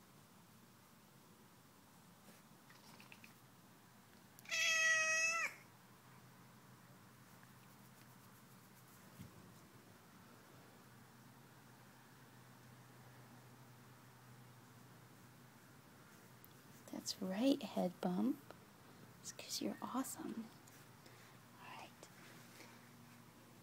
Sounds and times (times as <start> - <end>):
Speech: 16.9 - 18.4, 19.2 - 20.6
Whispering: 19.2 - 20.6, 21.6 - 22.2.